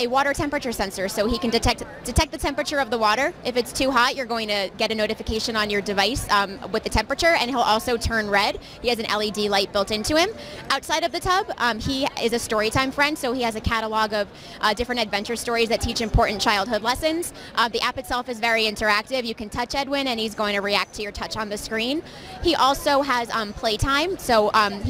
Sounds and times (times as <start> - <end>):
Speech: 0.0 - 24.8.